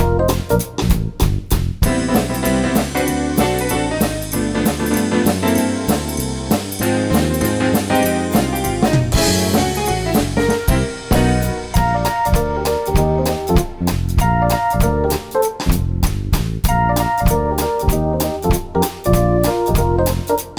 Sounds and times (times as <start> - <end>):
Percussion: 0.0 - 20.5.